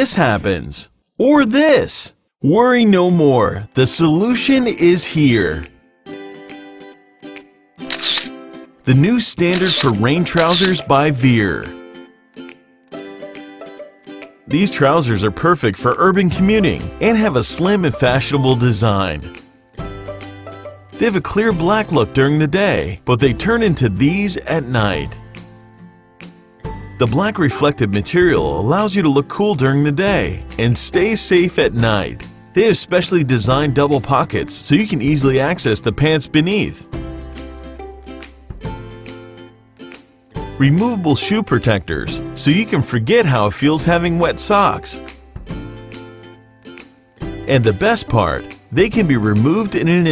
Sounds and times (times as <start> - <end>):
Speech: 0.0 - 5.7, 8.9 - 11.8, 14.5 - 19.4, 21.0 - 25.2, 27.0 - 36.8, 40.6 - 45.0, 47.5 - 50.1
Music: 2.4 - 50.1.